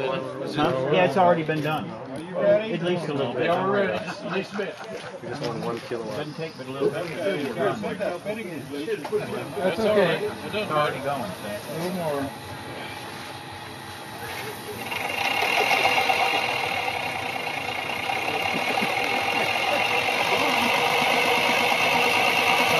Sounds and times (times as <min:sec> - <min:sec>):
Speech: 0:00.0 - 0:12.4.